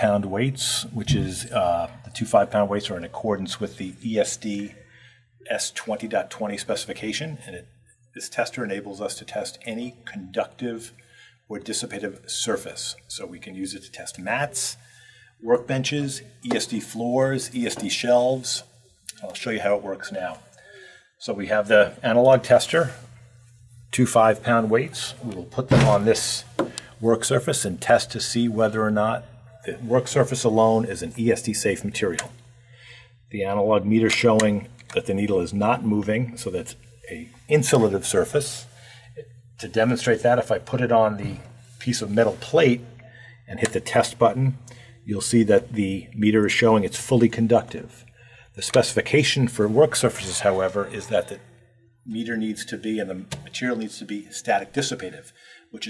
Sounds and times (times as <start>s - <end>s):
Speech: 0.0s - 23.2s, 23.9s - 32.5s, 33.3s - 55.9s.